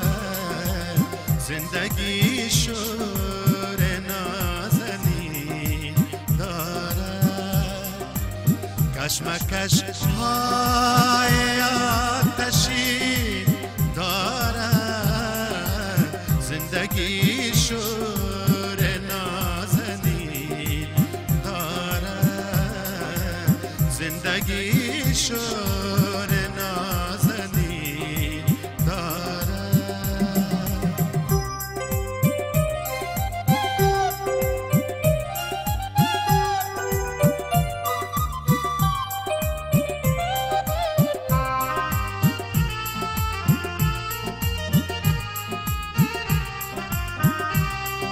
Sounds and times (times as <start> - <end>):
Music: 0.0 - 48.1.